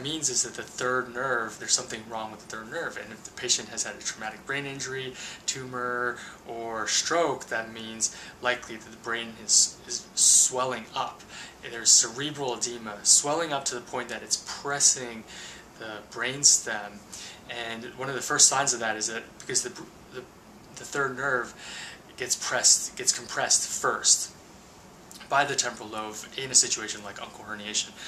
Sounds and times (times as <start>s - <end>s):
Speech: 0.0s - 24.4s, 25.1s - 28.0s
Inside, small room: 0.0s - 28.0s.